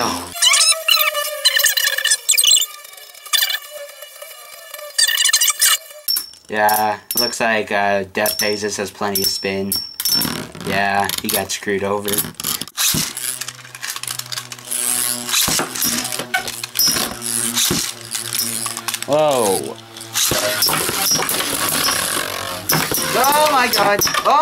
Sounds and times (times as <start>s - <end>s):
Ratchet, pawl: 0.0s - 7.6s, 8.2s - 24.4s.